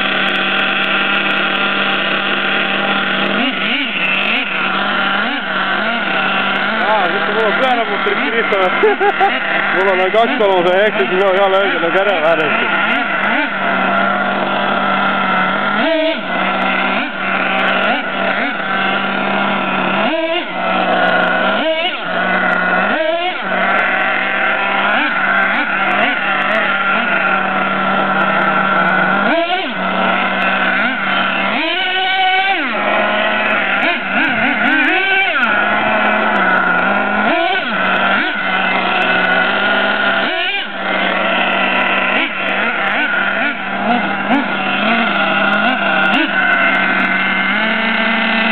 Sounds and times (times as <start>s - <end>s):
Outside, urban or manmade: 0.0s - 48.5s.